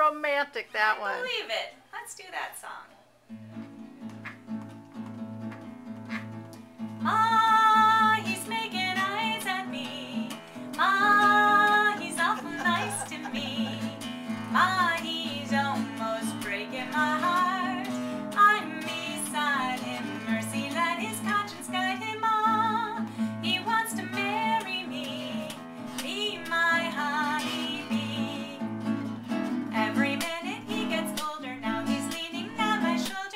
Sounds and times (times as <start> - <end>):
Acoustic guitar: 3.2 - 33.3.